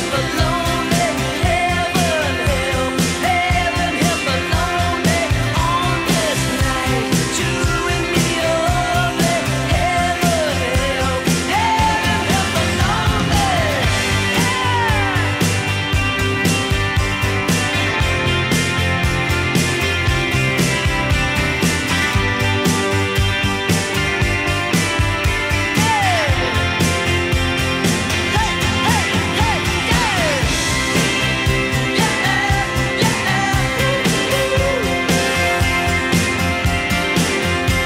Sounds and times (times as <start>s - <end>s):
Singing: 0.0s - 15.4s
Music: 0.0s - 37.8s.